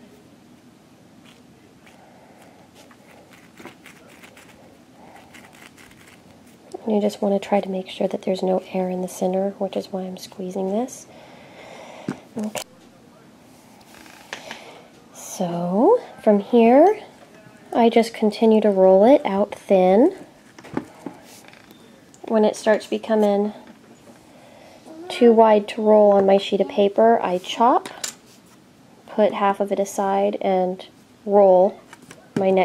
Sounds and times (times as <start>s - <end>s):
Inside, small room: 0.0s - 32.6s
Speech: 6.8s - 11.1s, 15.1s - 20.2s, 22.2s - 23.6s, 25.0s - 28.0s, 29.1s - 32.6s.